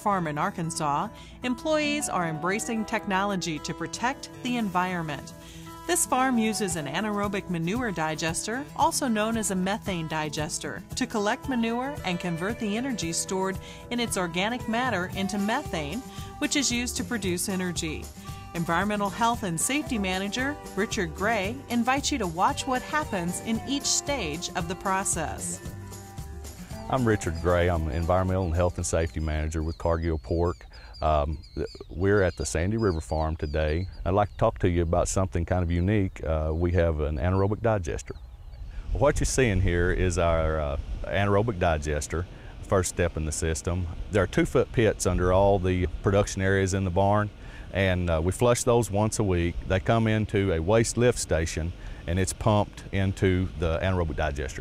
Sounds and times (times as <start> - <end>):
Speech: 0.0 - 5.3, 5.9 - 25.6, 26.9 - 38.2, 39.0 - 54.6.